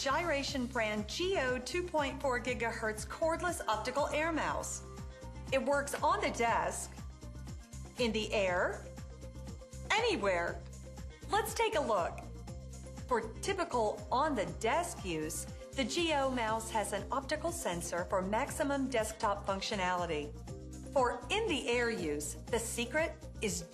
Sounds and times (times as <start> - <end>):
Speech: 0.0 - 4.8, 5.5 - 6.9, 8.0 - 8.8, 9.9 - 10.6, 11.3 - 12.2, 13.1 - 20.3, 21.0 - 23.7
Music: 0.0 - 23.7.